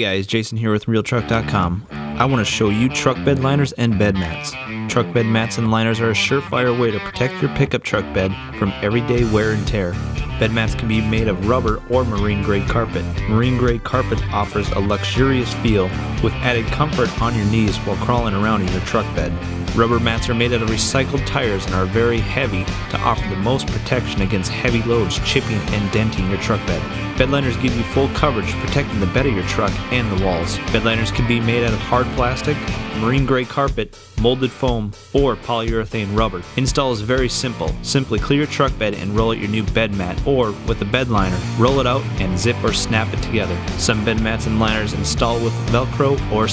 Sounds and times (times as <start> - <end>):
Speech: 0.0 - 46.5
Music: 1.0 - 46.5.